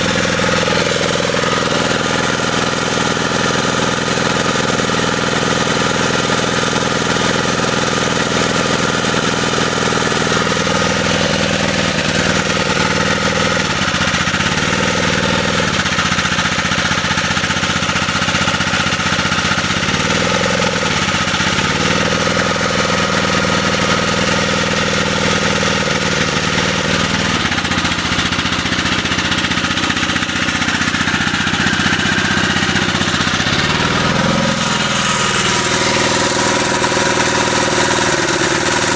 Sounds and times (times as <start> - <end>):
Jackhammer: 0.0 - 38.9
Outside, urban or manmade: 0.0 - 38.9.